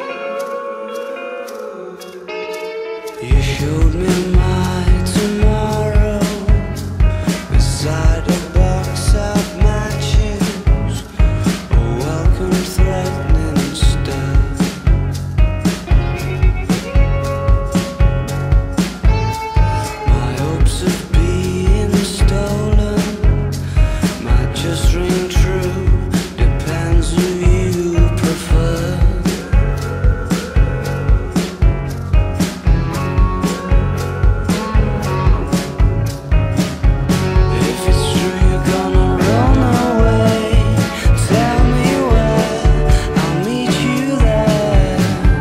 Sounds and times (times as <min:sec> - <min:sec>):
Grunge: 0:00.0 - 0:45.4.